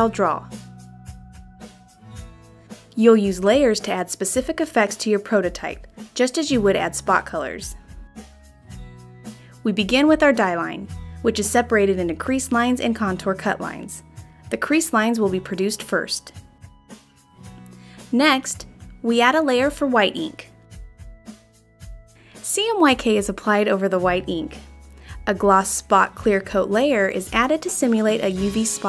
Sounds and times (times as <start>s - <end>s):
Speech: 0.0s - 0.5s, 3.0s - 7.8s, 9.6s - 16.3s, 18.1s - 20.5s, 22.4s - 24.6s, 25.2s - 28.8s
Music: 0.0s - 28.8s.